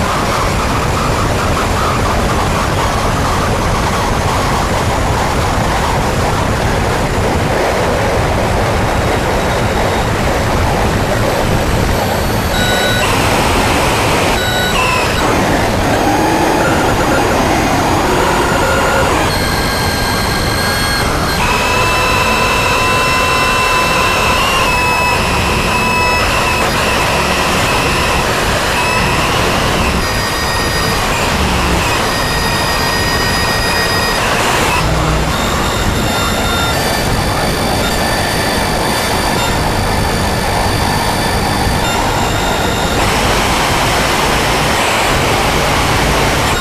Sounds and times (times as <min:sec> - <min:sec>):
Cacophony: 0:00.0 - 0:46.6
White noise: 0:00.0 - 0:46.6.